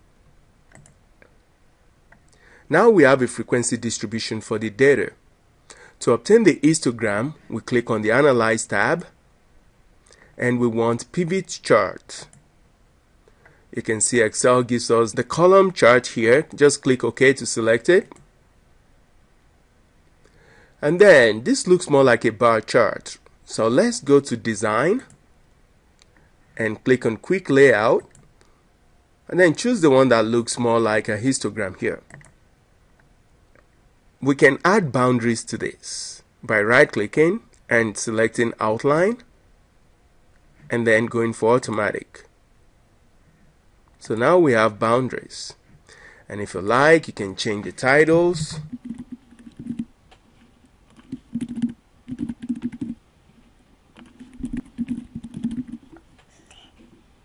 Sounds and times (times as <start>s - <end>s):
Computer keyboard: 0.7s - 1.0s, 48.5s - 49.9s, 50.9s - 53.0s, 54.0s - 56.2s
Speech: 2.7s - 5.2s, 6.0s - 9.2s, 10.4s - 12.3s, 13.8s - 18.2s, 20.8s - 25.2s, 26.6s - 28.1s, 29.3s - 32.1s, 34.2s - 39.3s, 40.7s - 42.3s, 44.0s - 45.6s, 46.3s - 48.7s.